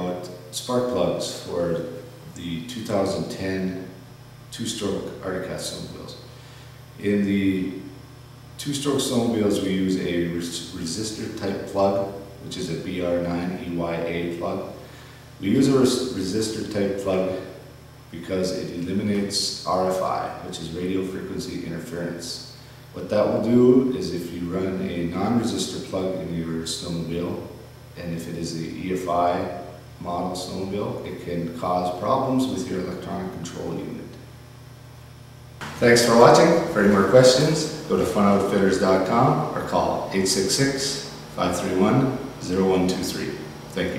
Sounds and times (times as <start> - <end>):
Speech: 0.0 - 6.3, 7.0 - 8.0, 8.6 - 14.8, 15.4 - 34.3, 35.6 - 43.9.